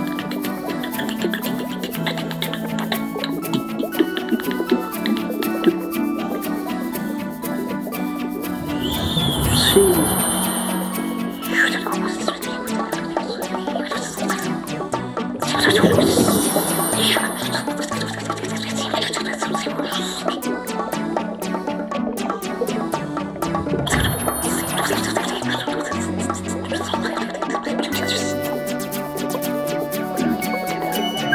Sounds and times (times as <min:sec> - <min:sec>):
Music: 0:00.0 - 0:31.3.